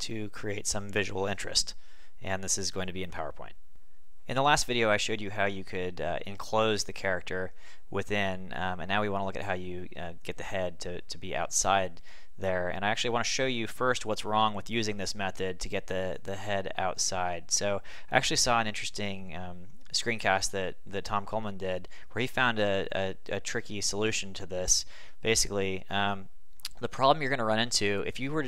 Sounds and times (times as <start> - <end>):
Speech: 0.0 - 3.6, 4.3 - 28.4.